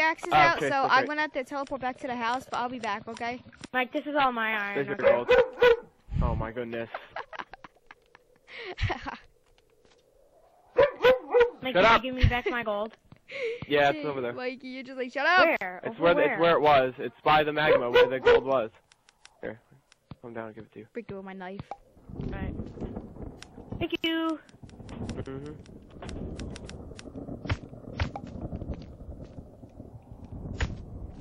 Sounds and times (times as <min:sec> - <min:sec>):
Bow-wow: 0:04.8 - 0:05.9, 0:10.8 - 0:11.6, 0:17.6 - 0:18.6.